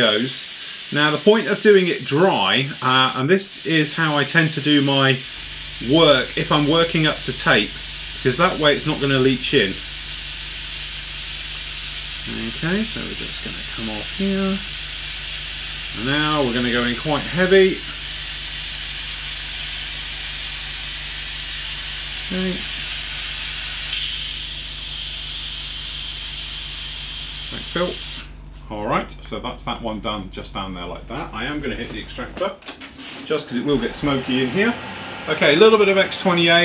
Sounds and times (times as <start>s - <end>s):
Speech: 0.0s - 5.2s, 5.8s - 9.8s, 12.2s - 14.7s, 16.0s - 18.0s, 22.3s - 22.7s, 27.5s - 28.0s, 28.7s - 32.6s, 33.3s - 36.6s.